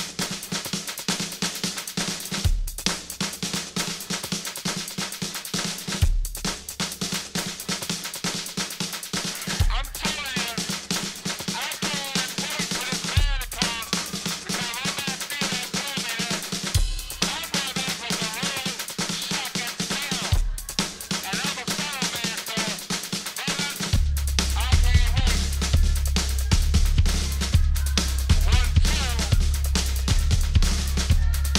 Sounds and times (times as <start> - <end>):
Drum: 0.0 - 31.5
Drum kit: 0.0 - 31.5
Speech: 9.6 - 10.8, 11.6 - 16.5, 17.2 - 20.5, 21.2 - 22.8, 23.4 - 24.0, 24.6 - 25.5, 28.3 - 29.4.